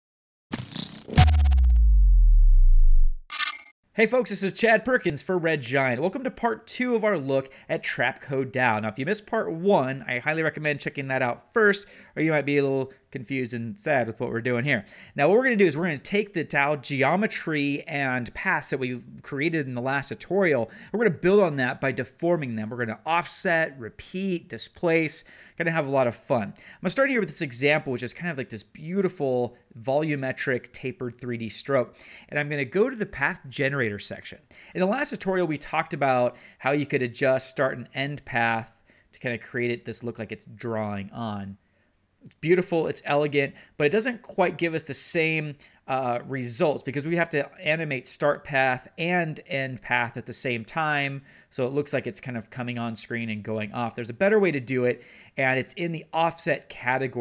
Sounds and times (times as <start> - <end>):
Speech: 4.0 - 41.6, 42.2 - 57.2.